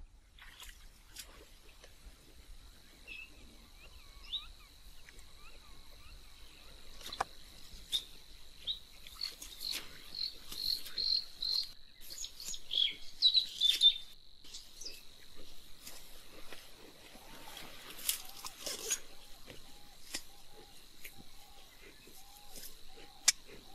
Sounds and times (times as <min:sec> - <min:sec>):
Chirp, tweet: 0:02.9 - 0:07.3, 0:07.9 - 0:15.0.